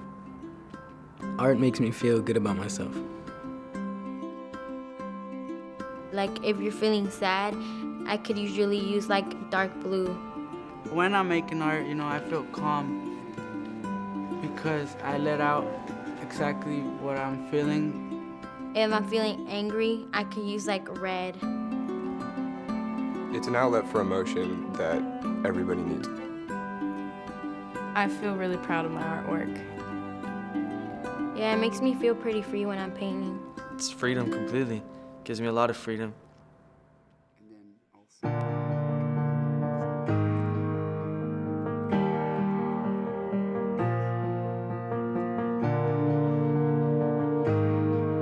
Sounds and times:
Music: 0:00.0 - 0:48.2.

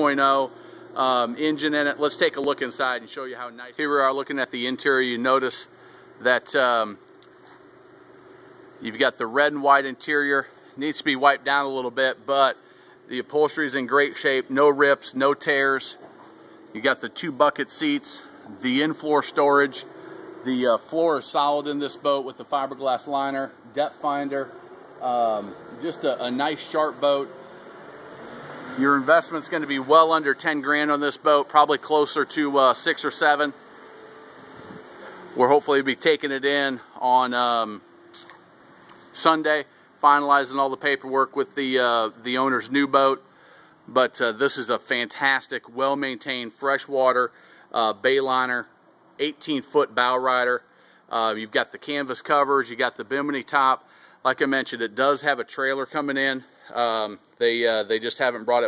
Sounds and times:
Speech: 0:00.0 - 0:07.0, 0:08.8 - 0:16.0, 0:16.7 - 0:27.3, 0:28.8 - 0:33.6, 0:35.4 - 0:37.8, 0:39.1 - 0:43.2, 0:43.9 - 0:58.6.

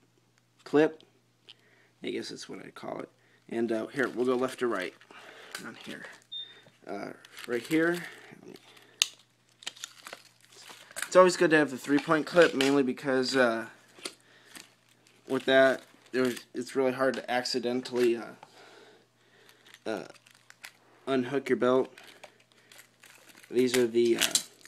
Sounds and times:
Speech: 0:02.0 - 0:05.0, 0:05.6 - 0:06.2, 0:06.8 - 0:08.6, 0:11.1 - 0:13.8, 0:15.3 - 0:18.4, 0:19.9 - 0:20.2, 0:21.1 - 0:21.9, 0:23.5 - 0:24.4.

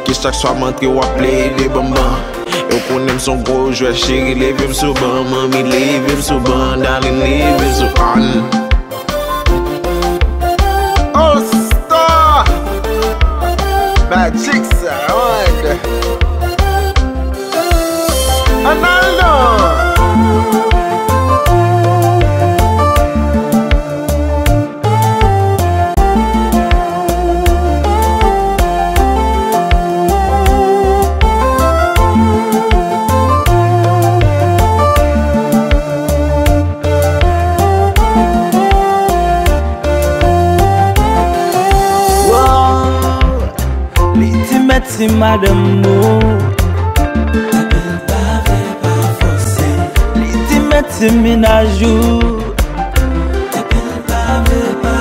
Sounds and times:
Afrobeat: 0:00.0 - 0:55.0.

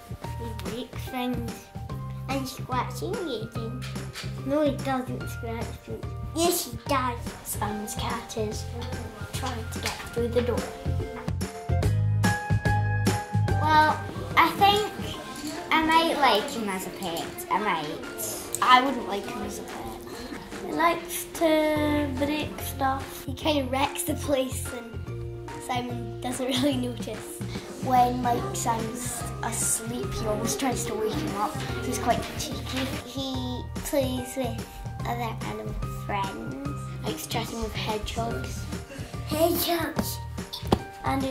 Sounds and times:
Music: 0:00.0 - 0:41.3
Speech: 0:02.3 - 0:03.8, 0:13.6 - 0:20.0, 0:27.8 - 0:38.6.

